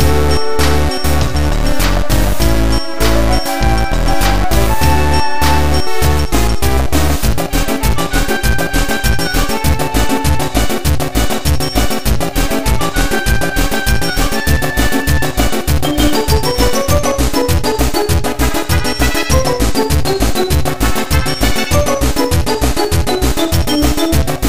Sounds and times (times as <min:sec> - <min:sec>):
Music: 0:00.0 - 0:24.4.